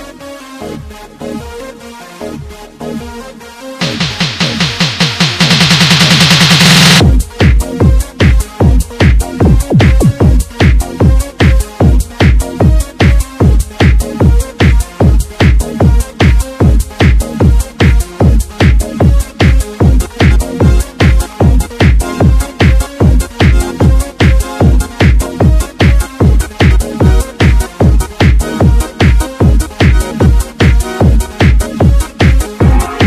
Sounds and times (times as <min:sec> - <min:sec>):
Techno: 0:00.0 - 0:33.0.